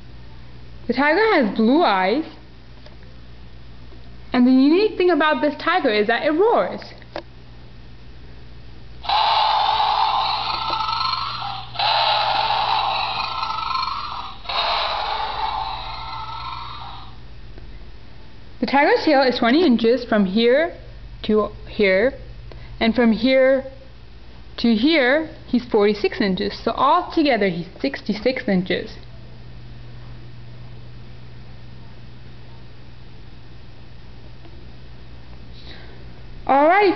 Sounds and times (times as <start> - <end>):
Speech: 0.9 - 2.4, 4.3 - 7.0, 18.6 - 23.8, 24.6 - 29.0, 36.5 - 36.9.